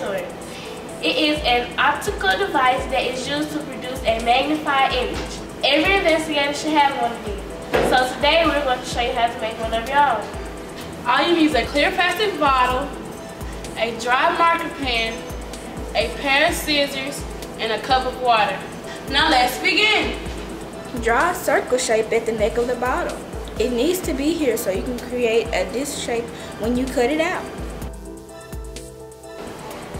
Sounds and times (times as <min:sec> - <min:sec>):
Music: 0:00.0 - 0:29.9
Speech: 0:01.0 - 0:10.3, 0:11.1 - 0:12.9, 0:16.0 - 0:20.2, 0:21.0 - 0:27.5.